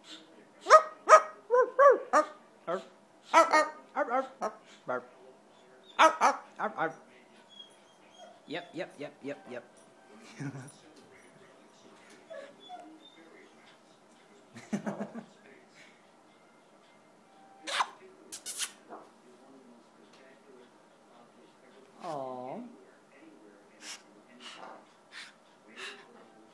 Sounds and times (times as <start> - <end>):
Speech: 17.7 - 24.9, 25.6 - 26.5.